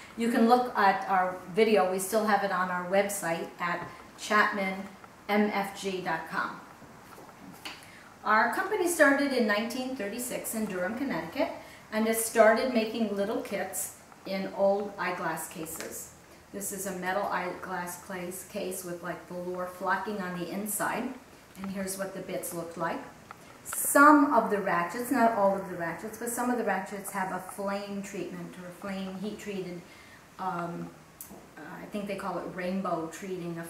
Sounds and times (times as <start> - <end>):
Speech: 0.2 - 6.7, 8.2 - 33.6.